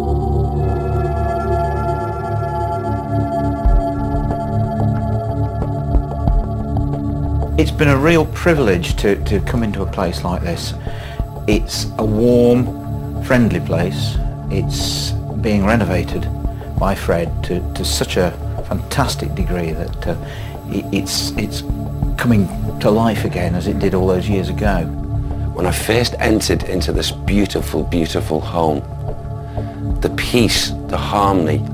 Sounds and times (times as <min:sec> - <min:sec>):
Music: 0:00.0 - 0:31.7
Speech: 0:07.5 - 0:10.8, 0:11.5 - 0:24.9, 0:25.6 - 0:28.9, 0:30.0 - 0:31.7.